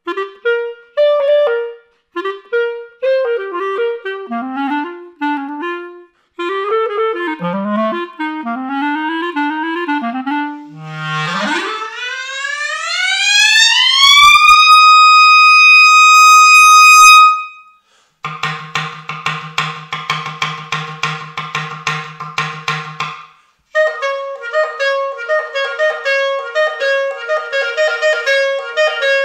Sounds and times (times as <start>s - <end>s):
Clarinet: 0.0s - 18.5s, 23.7s - 29.2s.